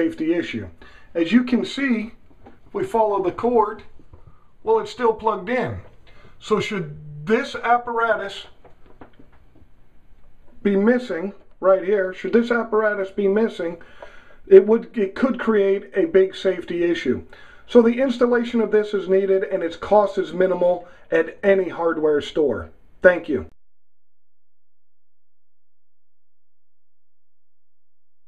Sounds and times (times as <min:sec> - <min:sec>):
Speech: 0:00.0 - 0:03.9, 0:04.6 - 0:08.6, 0:10.6 - 0:13.8, 0:14.5 - 0:23.6.